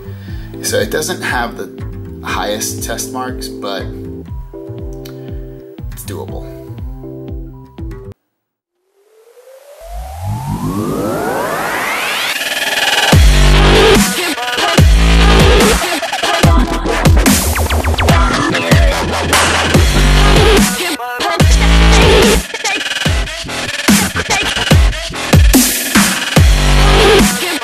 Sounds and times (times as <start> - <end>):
Drum and bass: 9.8 - 27.6.